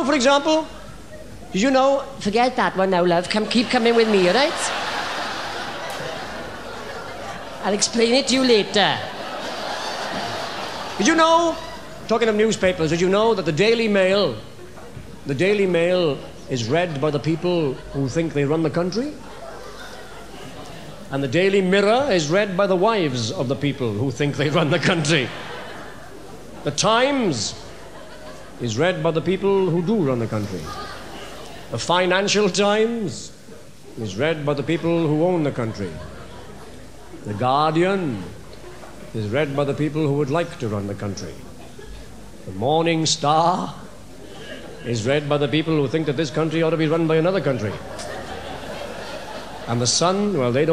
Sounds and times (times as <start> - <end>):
Male speech, man speaking: 0.0 - 0.7, 1.5 - 2.5, 7.7 - 9.1, 11.0 - 14.5, 15.3 - 19.2, 21.1 - 25.4, 26.6 - 27.6, 28.6 - 30.8, 31.7 - 33.4, 34.0 - 36.1, 37.3 - 38.4, 39.2 - 41.4, 42.5 - 43.8, 44.8 - 47.8, 49.7 - 50.7.